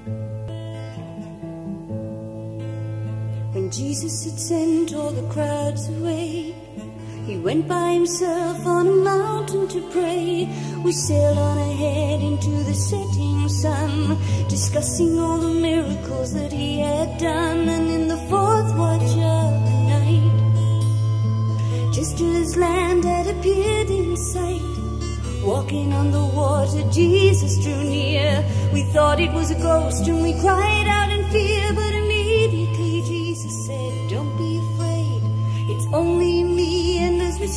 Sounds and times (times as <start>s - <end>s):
Music: 0.0s - 37.5s.